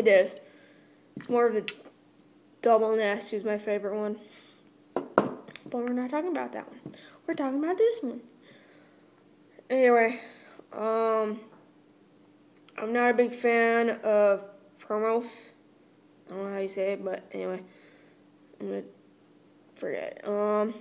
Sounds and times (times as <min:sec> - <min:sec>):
Speech: 0:00.0 - 0:00.4, 0:01.2 - 0:01.8, 0:02.6 - 0:04.3, 0:05.7 - 0:08.3, 0:09.7 - 0:11.5, 0:12.8 - 0:15.6, 0:16.3 - 0:17.7, 0:18.6 - 0:19.0, 0:19.8 - 0:20.8.